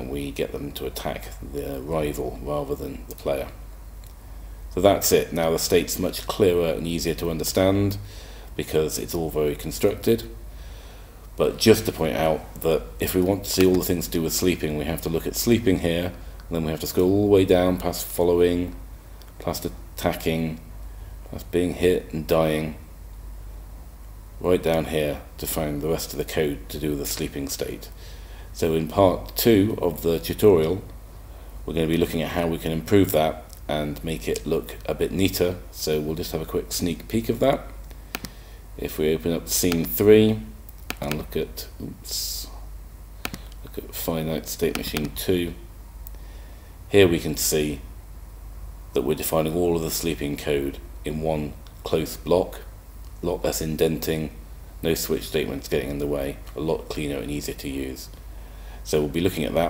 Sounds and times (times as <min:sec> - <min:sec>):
Speech: 0:00.0 - 0:03.6, 0:04.8 - 0:10.4, 0:11.4 - 0:18.8, 0:19.4 - 0:20.7, 0:21.3 - 0:22.9, 0:24.4 - 0:28.0, 0:28.6 - 0:30.9, 0:31.7 - 0:37.8, 0:38.8 - 0:42.7, 0:43.6 - 0:45.7, 0:46.9 - 0:47.9, 0:49.0 - 0:58.2, 0:58.8 - 0:59.7.